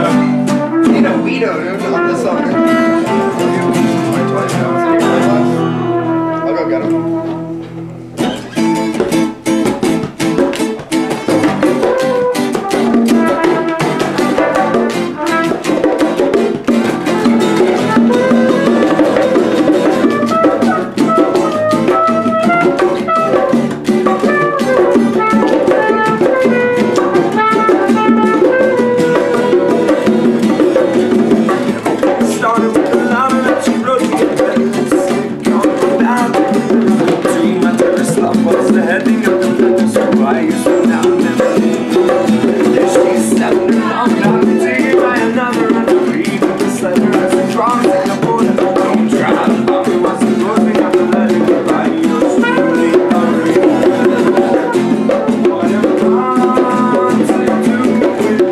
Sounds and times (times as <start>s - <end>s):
Music: 0.0s - 58.5s
Speech: 0.8s - 2.7s, 6.4s - 7.1s.